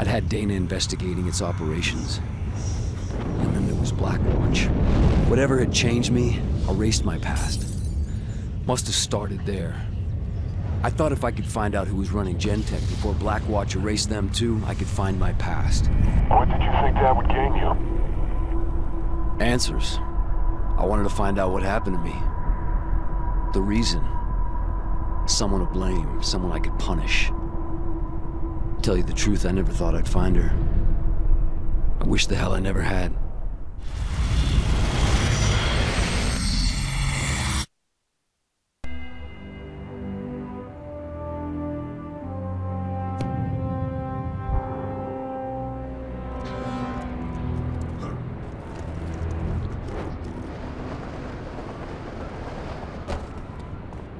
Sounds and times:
Speech: 10.8s - 17.8s, 19.4s - 20.0s, 20.8s - 22.2s, 23.6s - 24.2s, 25.3s - 27.3s, 28.8s - 30.6s, 32.0s - 33.2s.

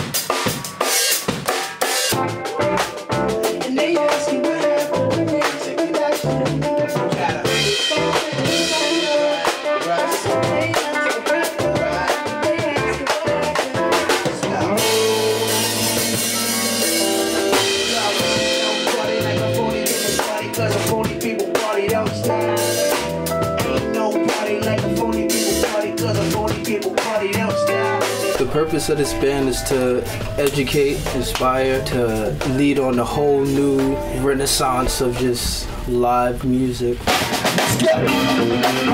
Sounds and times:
Funk: 0.0s - 38.9s.

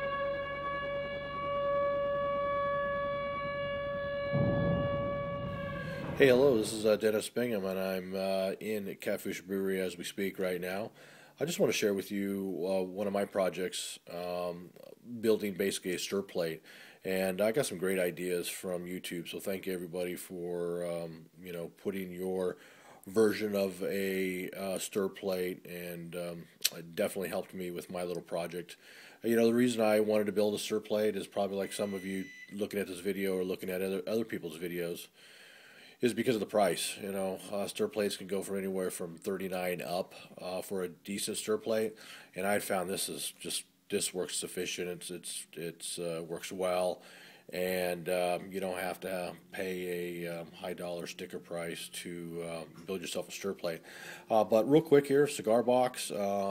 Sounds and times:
Speech: 6.2s - 35.1s, 36.0s - 56.5s.

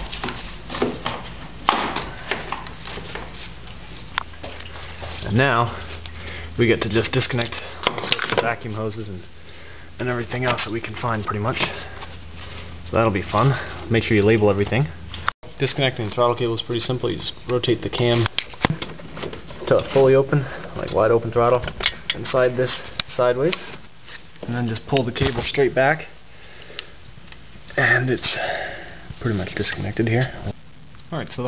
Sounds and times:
Speech: 5.2s - 5.8s, 6.6s - 7.7s, 8.3s - 9.3s, 10.0s - 12.0s, 12.9s - 15.0s, 15.6s - 18.3s, 19.6s - 23.7s, 24.4s - 26.2s, 27.7s - 28.6s, 29.2s - 31.4s.

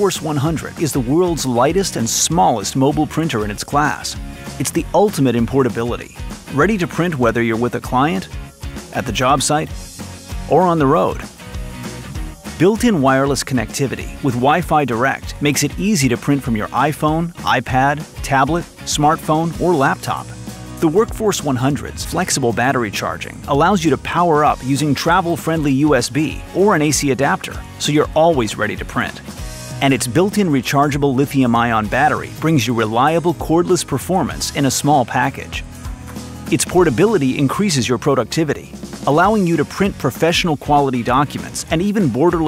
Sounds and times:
Speech: 0.0s - 9.8s, 10.5s - 11.3s, 12.6s - 35.6s, 36.5s - 42.4s
Music: 0.0s - 42.4s.

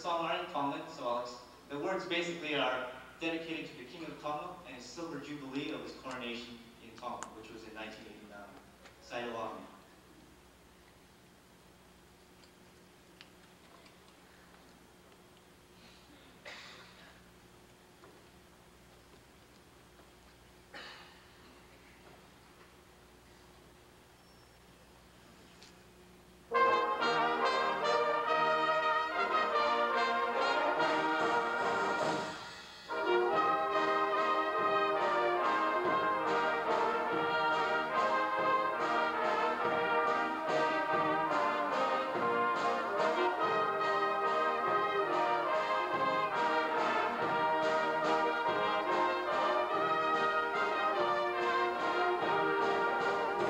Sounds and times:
Trombone: 26.5s - 53.5s.

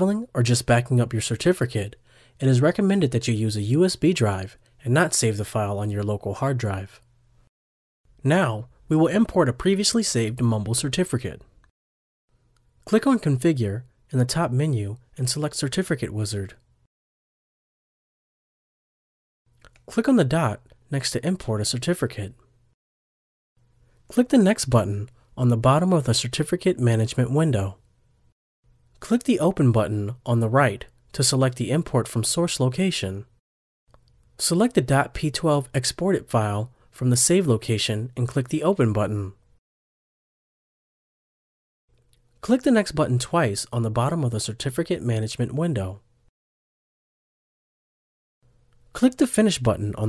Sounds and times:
Speech: 0.0s - 7.0s, 8.2s - 11.5s, 12.8s - 16.6s, 19.9s - 22.4s, 24.1s - 27.8s, 29.0s - 33.3s, 34.4s - 39.4s, 42.4s - 46.0s, 49.0s - 50.0s.

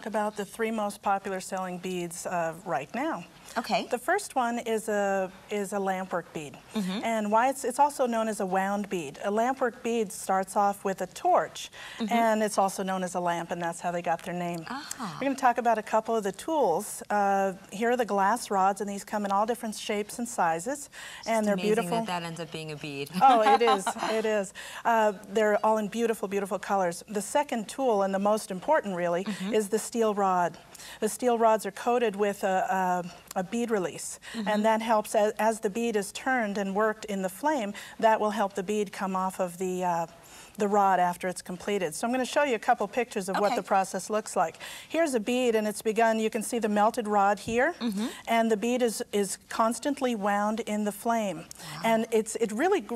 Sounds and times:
Speech: 0.0s - 52.9s.

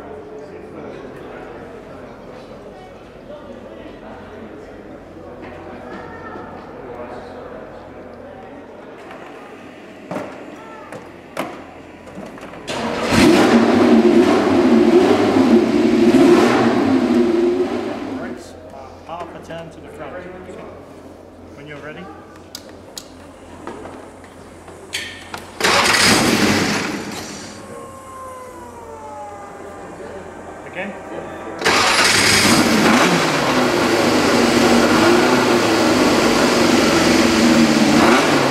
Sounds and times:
Speech: 0.0s - 9.8s, 18.2s - 20.8s, 27.6s - 31.6s.

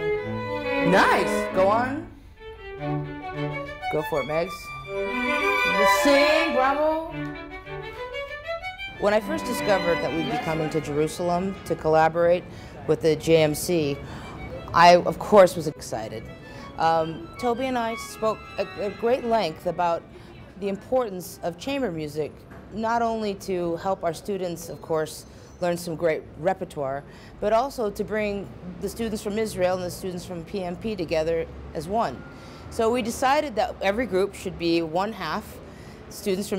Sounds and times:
Music: 0.0s - 20.1s
Speech: 3.9s - 4.7s, 5.7s - 7.1s, 9.0s - 14.0s, 20.6s - 32.2s.

